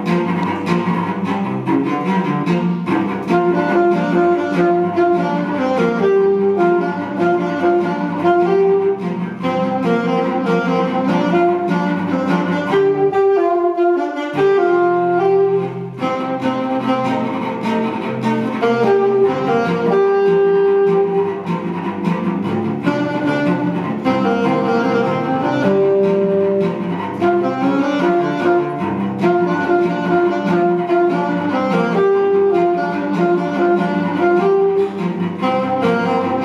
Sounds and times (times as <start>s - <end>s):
Cello: 0.0s - 36.4s.